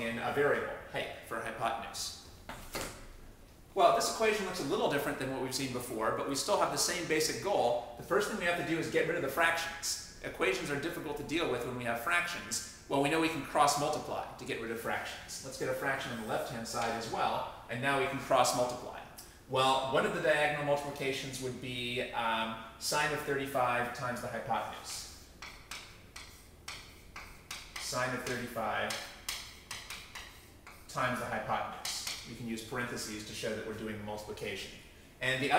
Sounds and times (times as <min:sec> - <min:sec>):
Speech: 0:00.0 - 0:02.2, 0:03.8 - 0:25.2, 0:27.8 - 0:29.1, 0:30.9 - 0:35.5.